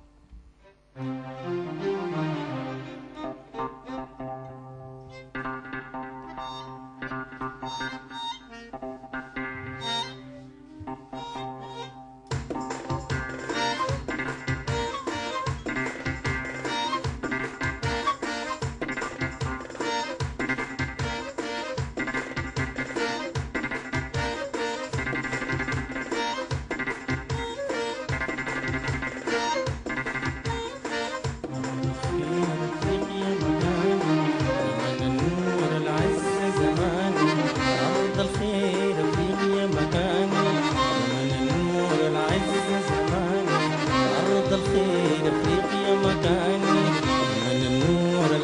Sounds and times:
Music: 0.0 - 48.4.

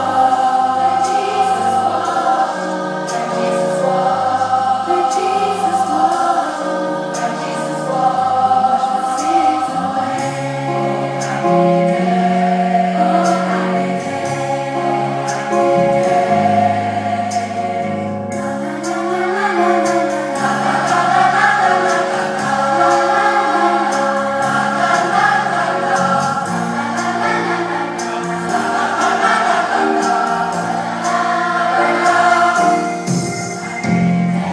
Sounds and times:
Choir: 0.0 - 34.5.

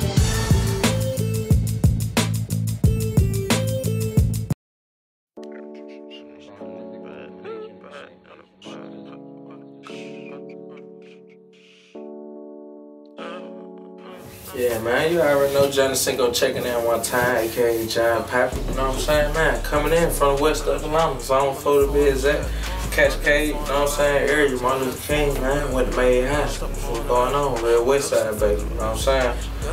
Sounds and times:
Music: 0.0 - 4.6, 5.4 - 29.7
Speech: 13.2 - 29.7.

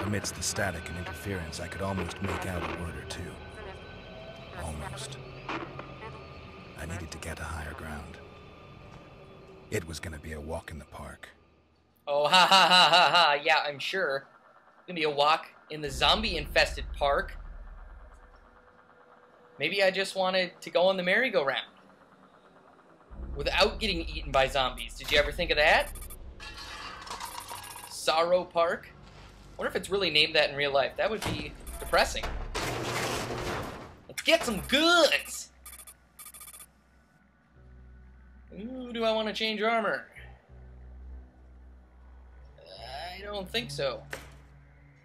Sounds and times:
Speech: 0.0 - 3.4, 6.8 - 8.2, 9.7 - 11.3, 13.2 - 14.2, 14.9 - 17.3, 19.6 - 21.7, 23.4 - 25.9, 29.6 - 32.3, 34.1 - 35.5, 38.5 - 40.2, 42.6 - 44.0.

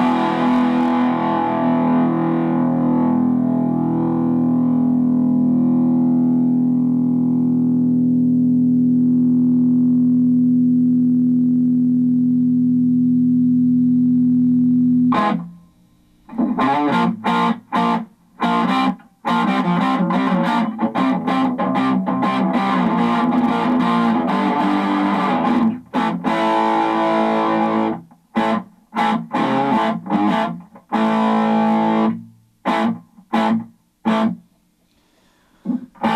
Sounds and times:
Effects unit: 0.0 - 36.1
Inside, small room: 0.0 - 36.1.

